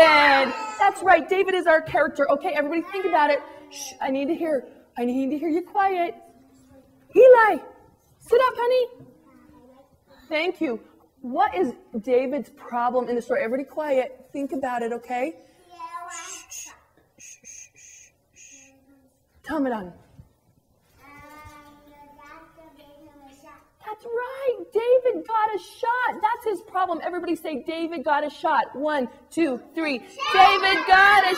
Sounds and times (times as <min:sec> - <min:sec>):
Inside, small room: 0:00.0 - 0:31.3
Child speech, kid speaking: 0:02.7 - 0:03.9, 0:09.0 - 0:10.3, 0:15.5 - 0:16.9, 0:21.0 - 0:24.7, 0:30.2 - 0:31.3.